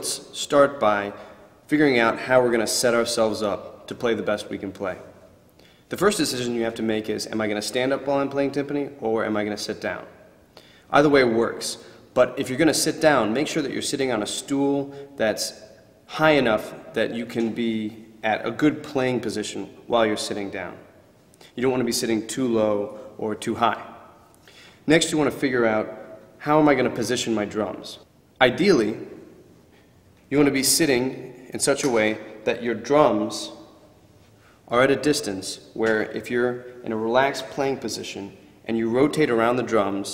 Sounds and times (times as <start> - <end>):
Speech: 0.0 - 5.1, 5.9 - 10.2, 10.9 - 20.9, 21.6 - 24.0, 24.9 - 29.1, 30.3 - 33.7, 34.7 - 40.1.